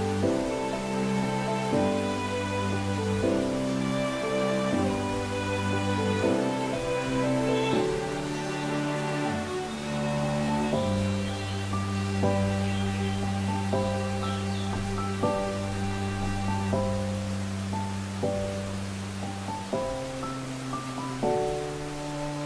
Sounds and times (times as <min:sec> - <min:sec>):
Music: 0:00.0 - 0:22.4
Raindrop: 0:00.0 - 0:22.4.